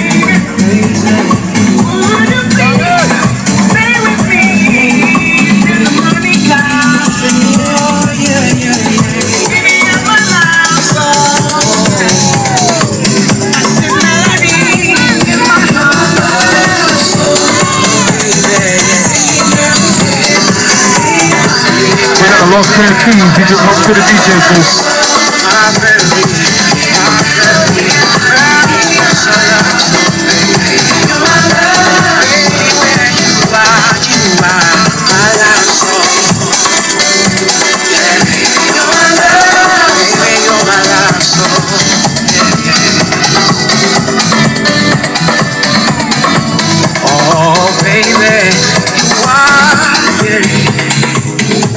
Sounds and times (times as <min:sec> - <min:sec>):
House music: 0:00.0 - 0:51.7
Speech: 0:22.2 - 0:24.8.